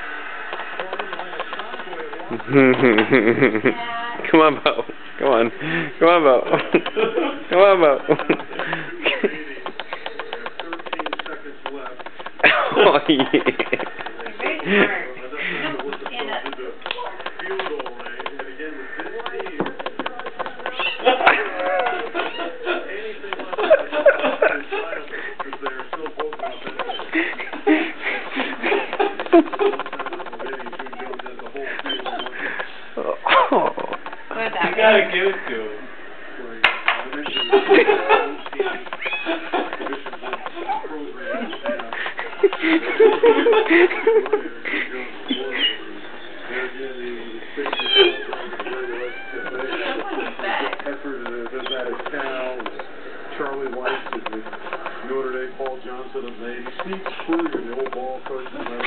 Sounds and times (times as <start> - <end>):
Cat: 20.5 - 22.5, 26.2 - 27.1, 31.8 - 32.4, 37.2 - 37.5, 38.9 - 41.9, 47.6 - 52.9
Dog: 26.2 - 27.5, 40.4 - 41.9.